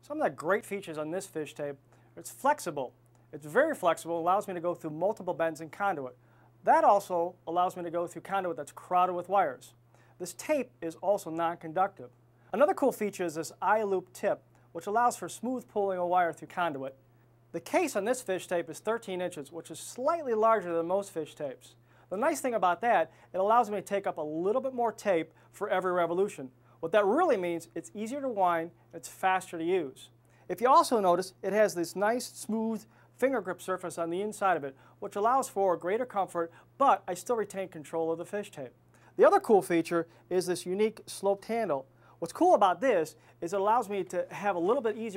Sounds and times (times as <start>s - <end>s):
Speech: 0.0s - 45.1s.